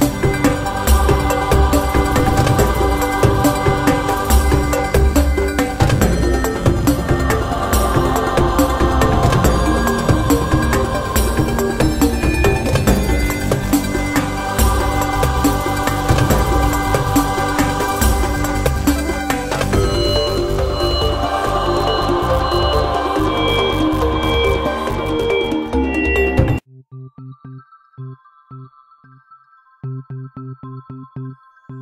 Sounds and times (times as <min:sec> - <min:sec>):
Rhythm and blues: 0:00.0 - 0:26.6.